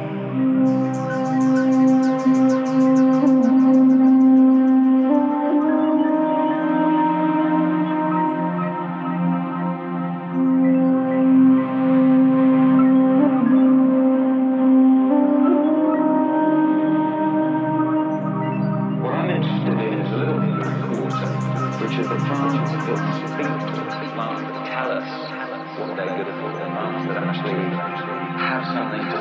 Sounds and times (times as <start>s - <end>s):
Music: 0.0s - 29.2s.